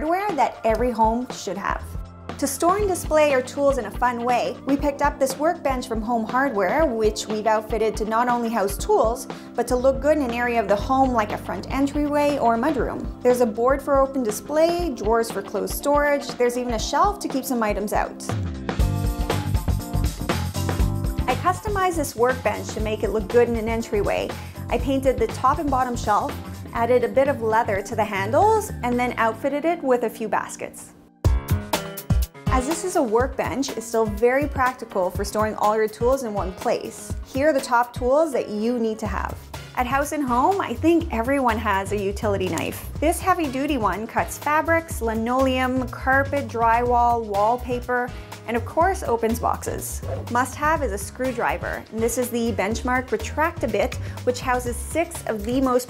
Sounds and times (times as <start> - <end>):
Speech: 0.0 - 18.4, 21.3 - 30.9, 32.5 - 55.9
Music: 0.0 - 55.9.